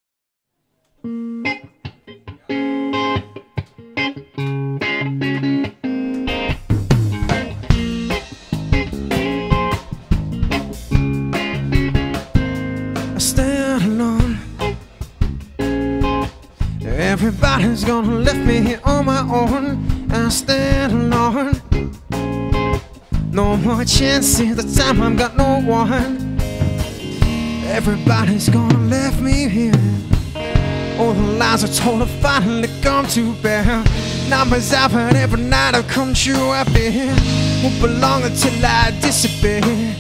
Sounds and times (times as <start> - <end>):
Electric guitar: 0.9 - 40.0.